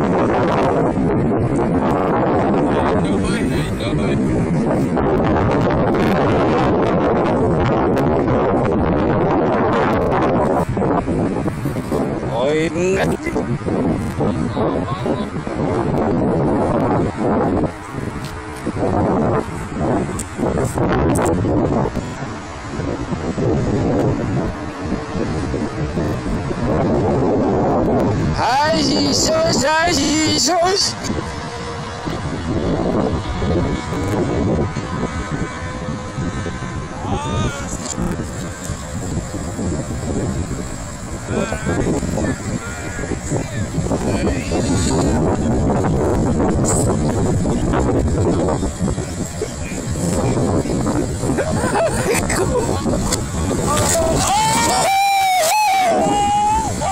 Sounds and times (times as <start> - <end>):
Motorcycle: 0.0 - 56.9
Outside, rural or natural: 0.0 - 56.9.